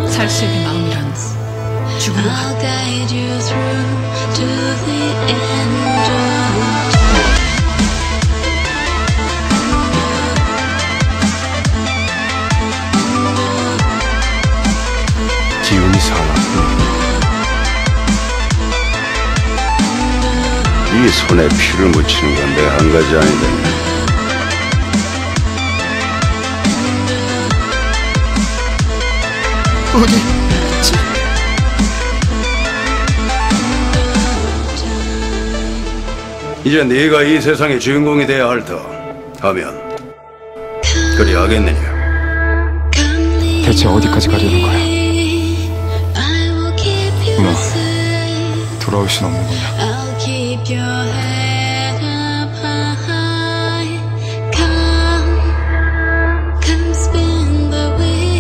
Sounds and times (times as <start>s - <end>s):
Electronic music: 6.5s - 11.2s, 29.0s - 36.4s.